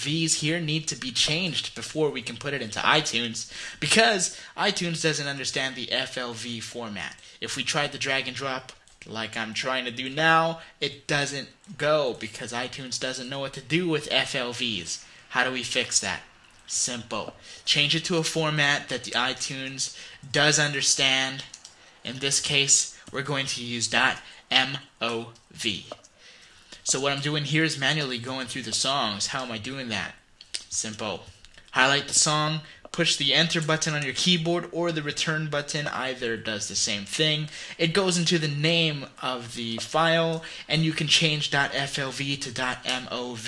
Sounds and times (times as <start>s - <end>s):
Speech: 0.0s - 26.0s, 26.8s - 43.4s.